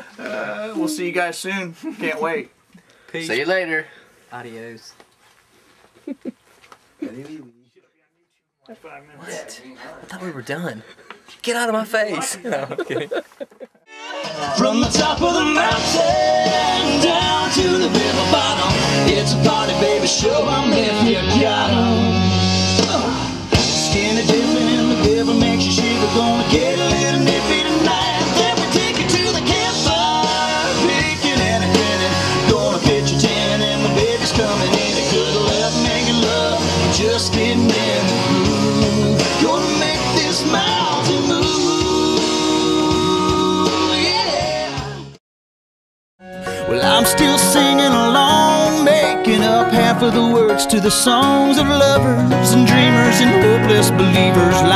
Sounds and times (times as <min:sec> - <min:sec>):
Music: 0:13.9 - 0:45.2, 0:46.2 - 0:54.7.